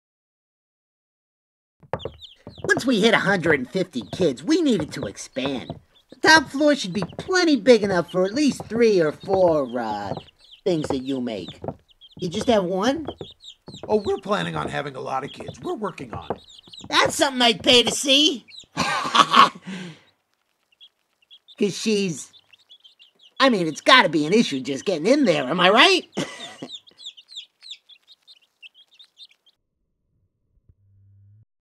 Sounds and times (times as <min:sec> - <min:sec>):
Speech: 0:02.7 - 0:11.6, 0:12.2 - 0:13.2, 0:13.9 - 0:18.5, 0:21.6 - 0:22.3, 0:23.4 - 0:26.1.